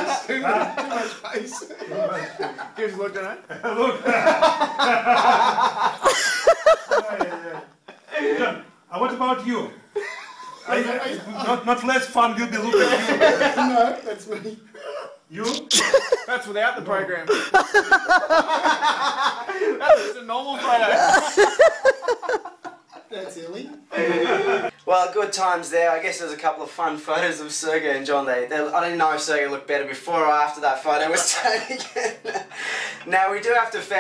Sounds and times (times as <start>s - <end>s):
Inside, small room: 0.0s - 34.0s
Snicker: 3.5s - 8.1s, 12.7s - 14.0s, 15.7s - 16.3s, 17.3s - 20.2s, 20.9s - 23.1s.